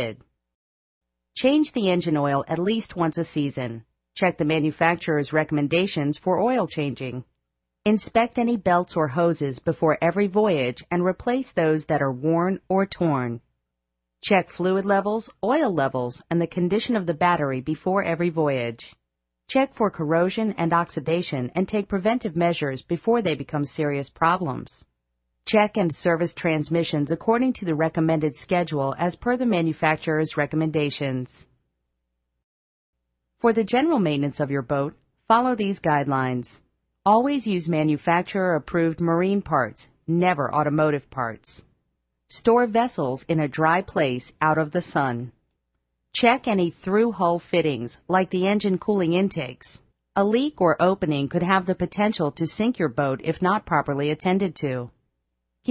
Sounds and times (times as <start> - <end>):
Speech: 0.0 - 0.2, 1.4 - 7.3, 7.9 - 13.4, 14.2 - 24.9, 25.5 - 31.5, 33.4 - 41.7, 42.3 - 45.4, 46.2 - 55.0.